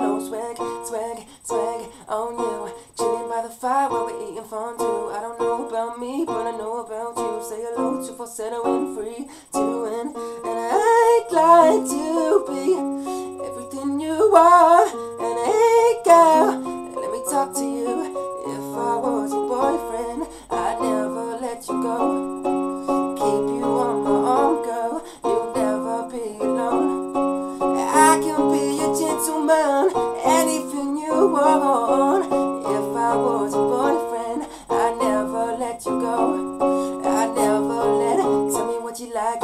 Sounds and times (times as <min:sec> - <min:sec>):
Male singing: 0:00.0 - 0:22.2, 0:23.1 - 0:27.0, 0:27.8 - 0:39.4
Music: 0:00.0 - 0:39.4.